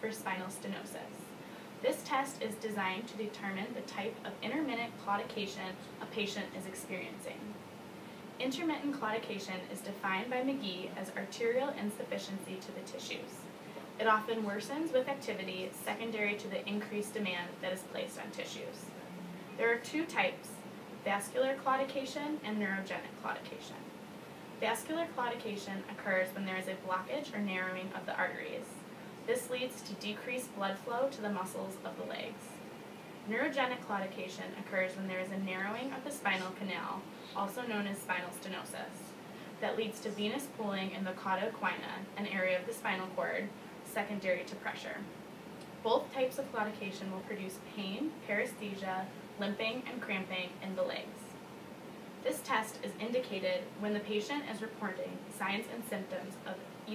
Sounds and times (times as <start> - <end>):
Speech: 0.0 - 7.6, 8.4 - 23.9, 24.6 - 32.6, 33.3 - 45.1, 45.8 - 51.4, 52.2 - 56.9.